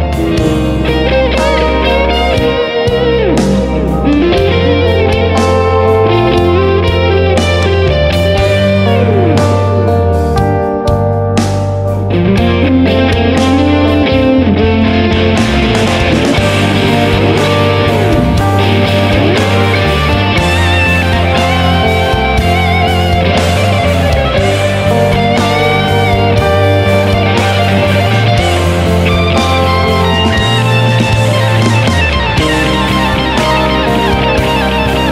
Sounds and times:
Electric guitar: 0.0s - 35.1s.

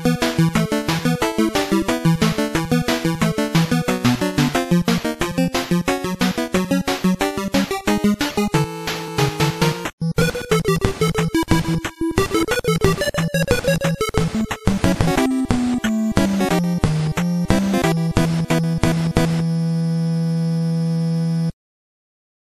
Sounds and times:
Video game music: 0.0s - 21.5s.

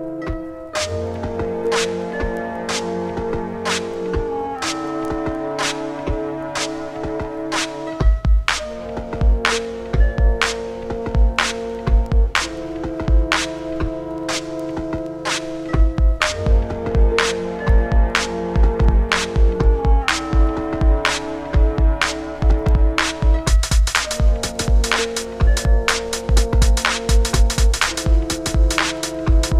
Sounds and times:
Ambient music: 0.0s - 29.6s.

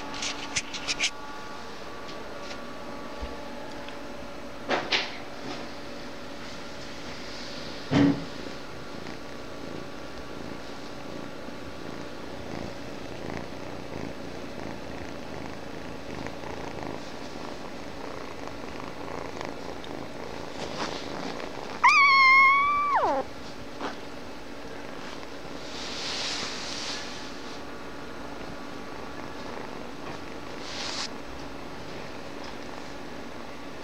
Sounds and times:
Purr: 4.9s - 33.8s.

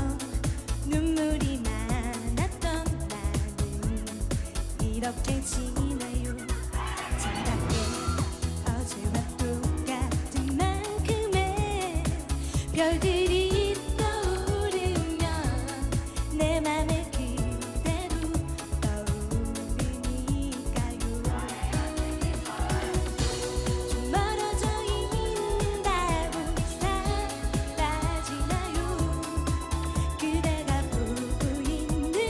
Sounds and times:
Music: 0.0s - 32.2s.

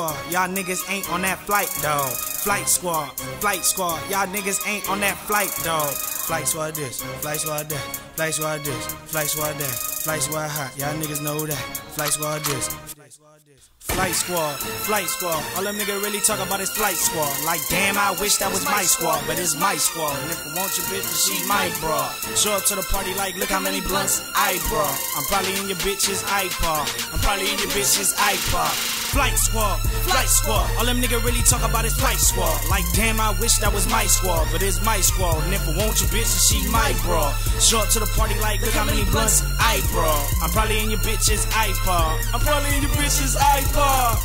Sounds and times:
Pop music: 0.0s - 13.1s, 13.8s - 44.2s.

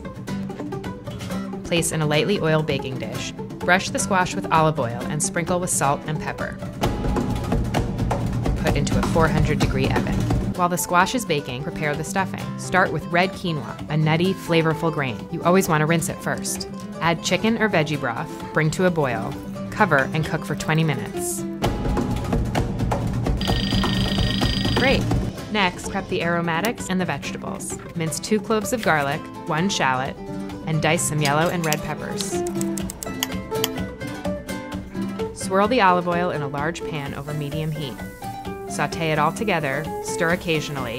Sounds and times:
Music: 0.0s - 40.9s
Speech: 1.7s - 6.6s, 8.6s - 21.4s, 24.8s - 32.4s, 35.4s - 38.1s, 38.7s - 40.9s.

